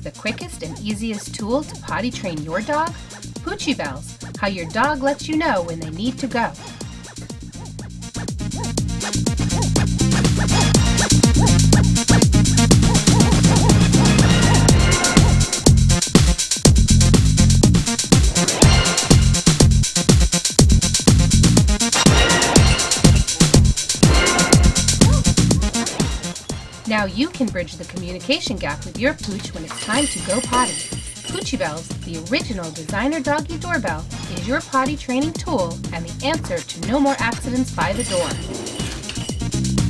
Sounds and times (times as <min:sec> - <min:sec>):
Speech: 0:00.0 - 0:06.6, 0:26.9 - 0:38.4
Music: 0:00.0 - 0:39.8.